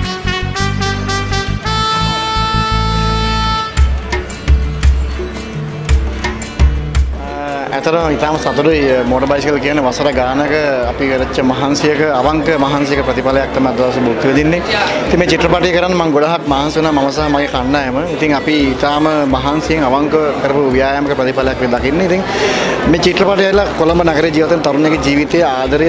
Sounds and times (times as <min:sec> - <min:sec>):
Music: 0:00.0 - 0:25.8.